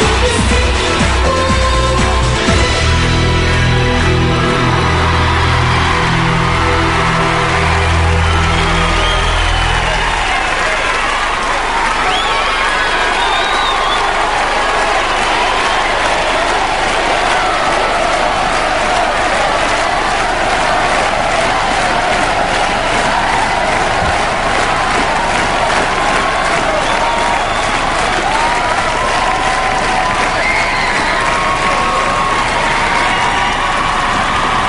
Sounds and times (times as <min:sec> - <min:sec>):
Music: 0:00.0 - 0:11.2.